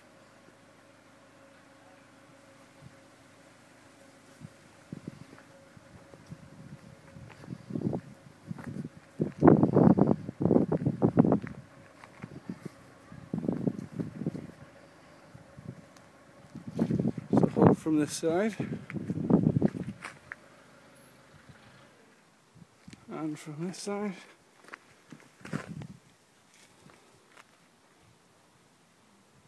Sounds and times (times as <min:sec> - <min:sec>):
Speech: 0:17.3 - 0:18.7, 0:23.1 - 0:24.4.